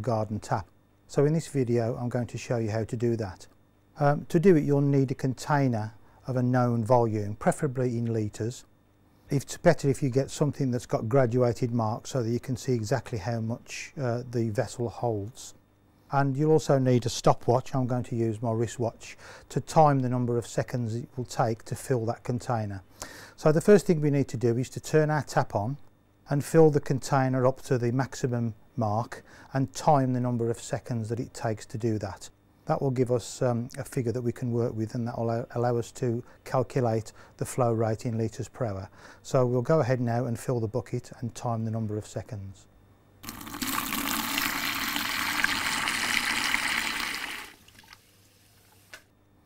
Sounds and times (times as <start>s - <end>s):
Male speech, man speaking: 0.0s - 8.7s, 9.3s - 22.8s, 23.4s - 42.7s
Water tap, faucet: 43.3s - 48.9s.